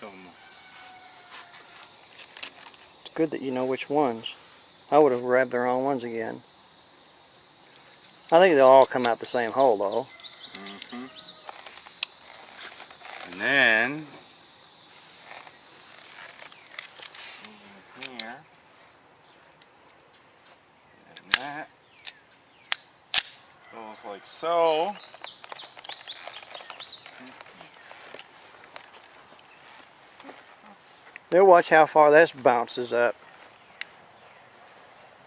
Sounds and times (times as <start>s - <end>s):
Speech: 3.1s - 6.4s, 31.3s - 33.2s
Bird: 7.6s - 11.8s, 23.6s - 28.6s.